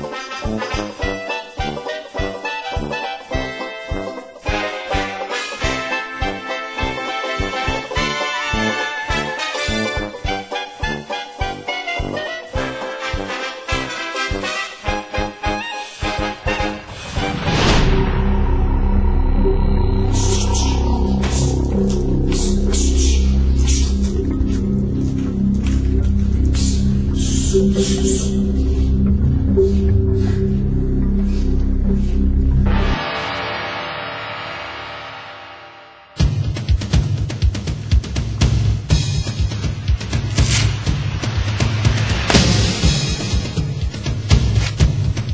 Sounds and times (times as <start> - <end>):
Music: 0.0 - 45.3.